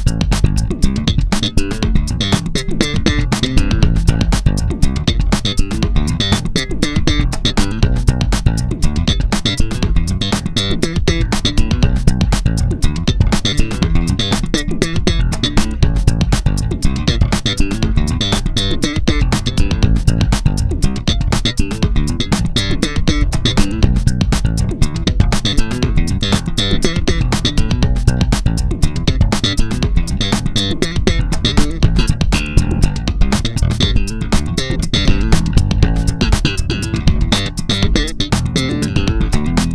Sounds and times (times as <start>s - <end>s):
Bass guitar: 0.0s - 39.7s.